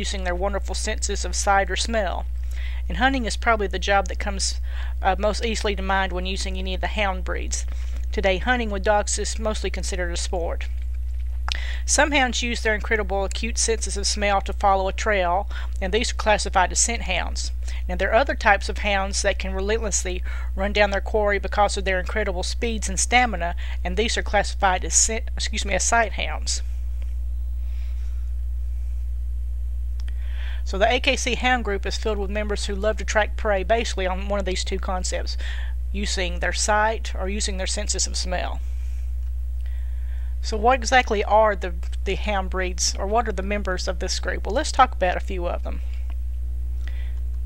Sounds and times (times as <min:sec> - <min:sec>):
Speech: 0:00.0 - 0:02.2, 0:02.9 - 0:10.7, 0:11.9 - 0:26.6, 0:30.7 - 0:38.6, 0:40.4 - 0:45.8.